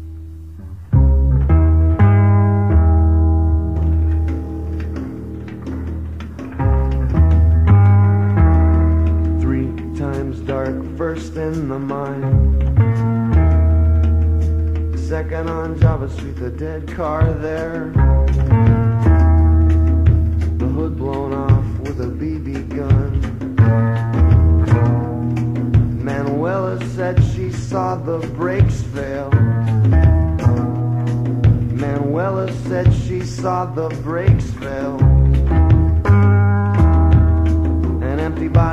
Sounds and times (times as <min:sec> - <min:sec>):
Music: 0:00.0 - 0:38.7.